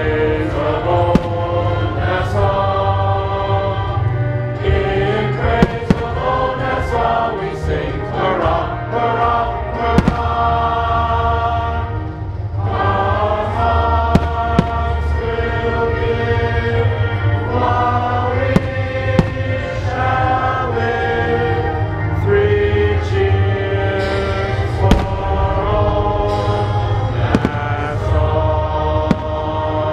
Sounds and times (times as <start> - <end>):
Choir: 0.0 - 29.9
Male singing: 12.8 - 29.9.